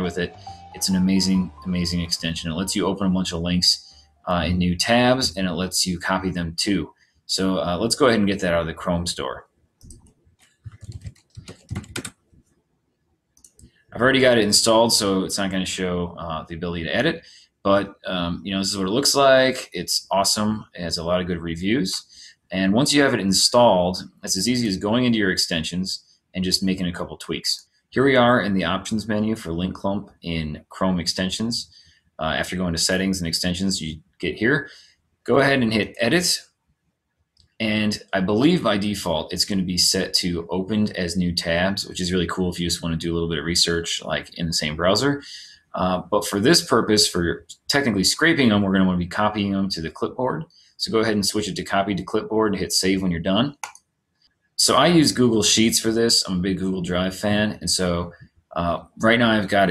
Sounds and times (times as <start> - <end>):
Speech: 0.0 - 9.4, 10.7 - 12.1, 14.0 - 36.5, 37.6 - 53.7, 54.6 - 59.7.